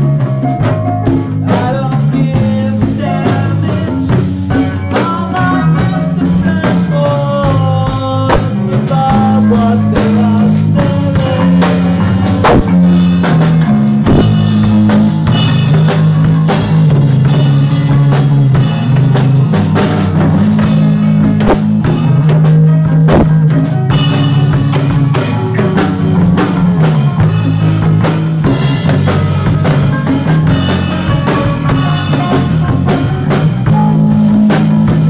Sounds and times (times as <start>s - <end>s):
Music: 0.0s - 35.1s.